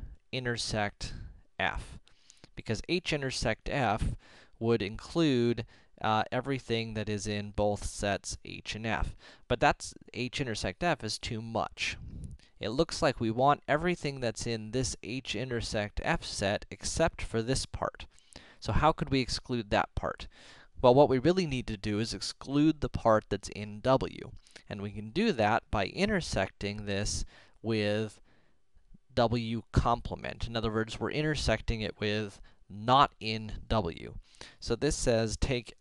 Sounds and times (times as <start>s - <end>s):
Speech: 0.0s - 2.0s, 2.6s - 28.2s, 29.0s - 35.8s.